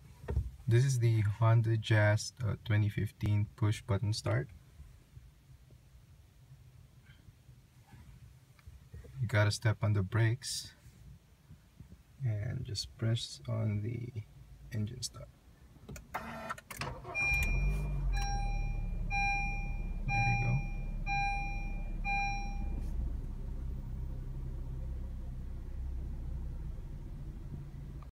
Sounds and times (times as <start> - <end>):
Car: 0.0 - 28.1
Medium engine (mid frequency): 15.6 - 28.1.